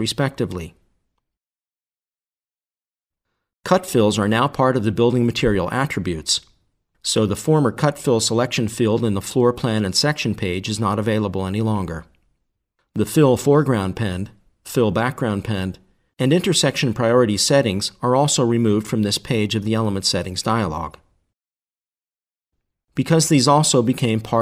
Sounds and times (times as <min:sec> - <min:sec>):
Speech: 0:00.0 - 0:00.8, 0:03.7 - 0:12.1, 0:12.9 - 0:21.1, 0:23.0 - 0:24.4.